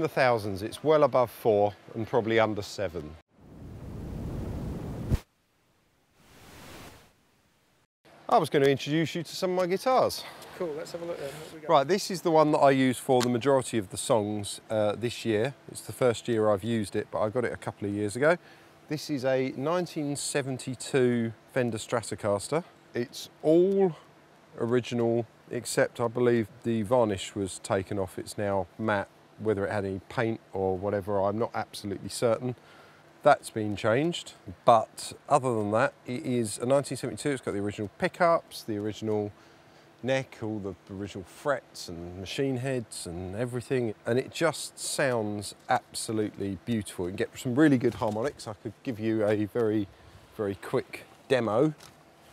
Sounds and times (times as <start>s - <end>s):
Speech: 0.0s - 3.2s, 8.3s - 32.6s, 33.2s - 39.4s, 40.0s - 51.8s.